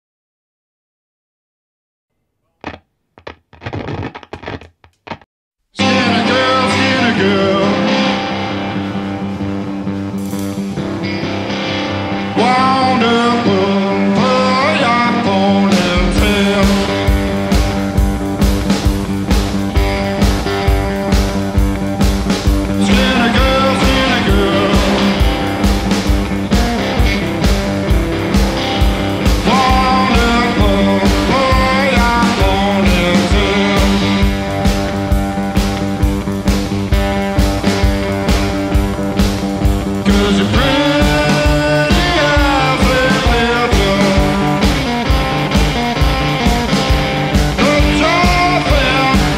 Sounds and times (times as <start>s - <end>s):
Music: 5.7s - 49.3s
Singing: 5.8s - 8.2s, 22.8s - 25.3s, 29.4s - 34.3s, 40.0s - 44.6s, 47.6s - 49.3s.